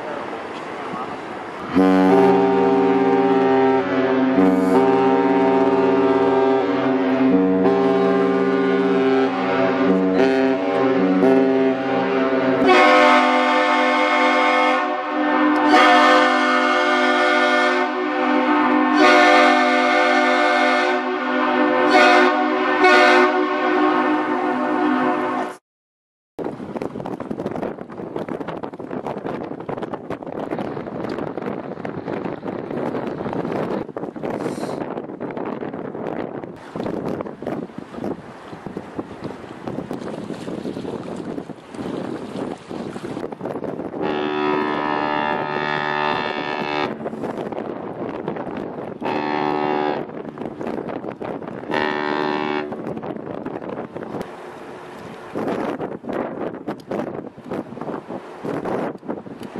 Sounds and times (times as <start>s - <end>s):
Ship: 0.0s - 25.6s, 26.4s - 59.5s.